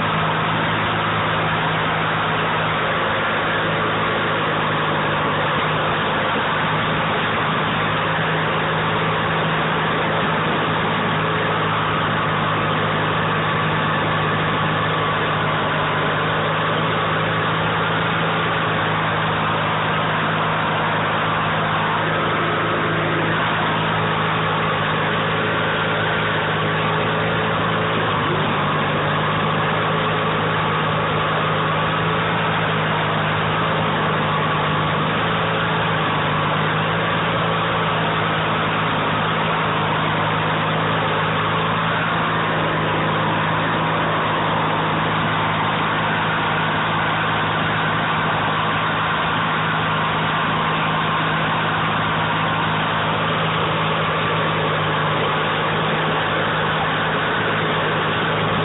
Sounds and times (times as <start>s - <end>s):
Outside, rural or natural: 0.0s - 58.6s
Vehicle: 0.0s - 58.6s.